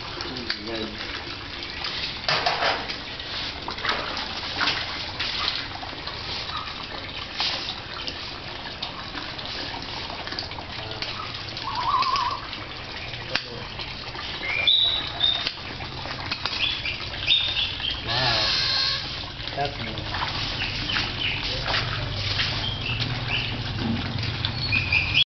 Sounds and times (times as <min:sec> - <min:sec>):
Speech: 0:00.2 - 0:01.0, 0:18.0 - 0:18.6, 0:19.5 - 0:20.1.